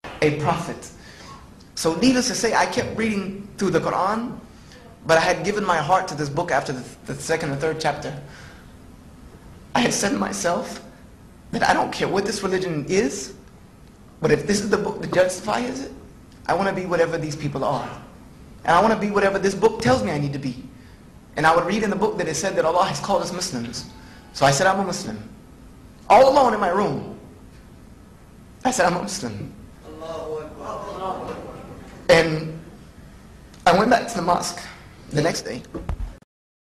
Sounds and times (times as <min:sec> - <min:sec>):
Male speech, man speaking: 0:00.2 - 0:01.0, 0:01.8 - 0:08.3, 0:09.8 - 0:10.9, 0:11.5 - 0:13.4, 0:14.2 - 0:20.7, 0:21.4 - 0:25.3, 0:26.1 - 0:27.2, 0:28.6 - 0:32.6, 0:33.6 - 0:35.7.